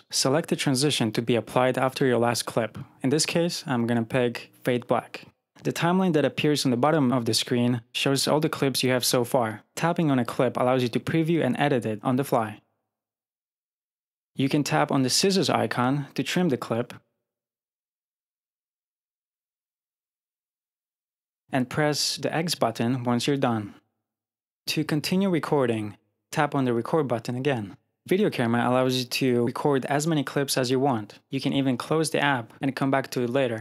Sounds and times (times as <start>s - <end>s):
Speech: 0.0s - 12.7s, 14.4s - 17.0s, 21.5s - 23.8s, 24.7s - 33.6s.